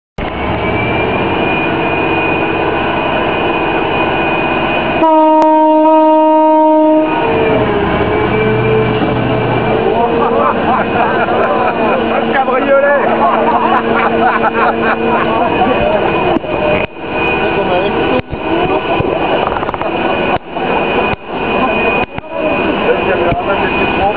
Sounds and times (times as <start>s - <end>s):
Vehicle: 0.2s - 5.0s, 7.1s - 24.1s
Outside, urban or manmade: 0.2s - 24.1s.